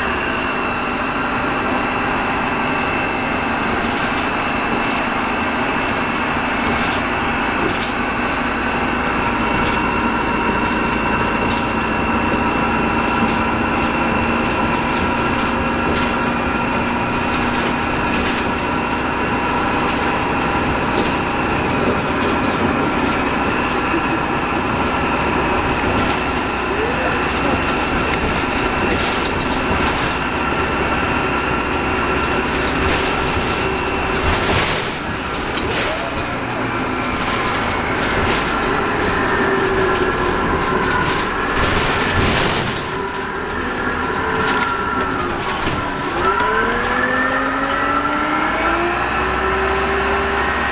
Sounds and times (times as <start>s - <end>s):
Vehicle: 0.0s - 50.7s.